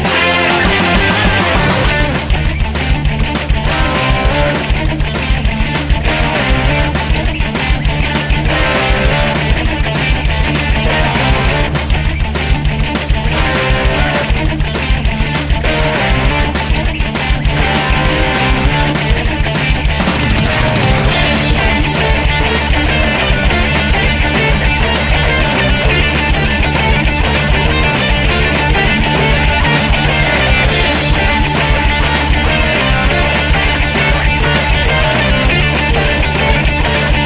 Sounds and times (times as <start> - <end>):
Music: 0.0 - 37.2.